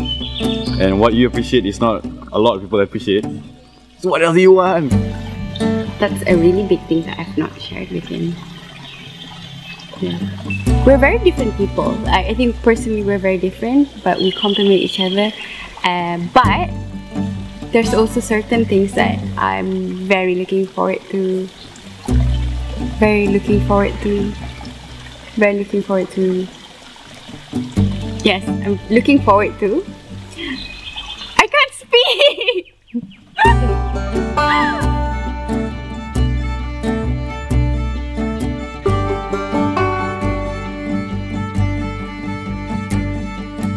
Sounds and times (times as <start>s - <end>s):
Trickle, dribble: 1.3s - 32.6s.